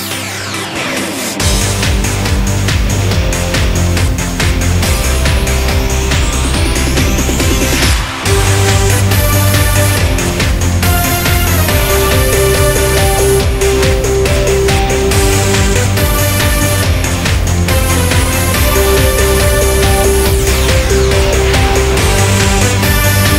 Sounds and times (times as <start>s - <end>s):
Music: 0.0s - 23.3s.